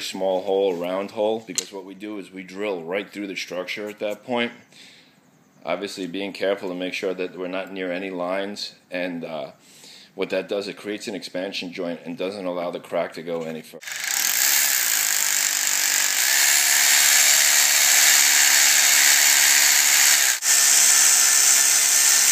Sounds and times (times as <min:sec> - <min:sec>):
Speech: 0:00.0 - 0:04.6, 0:05.6 - 0:09.6, 0:10.2 - 0:13.8
Drill: 0:13.8 - 0:22.3.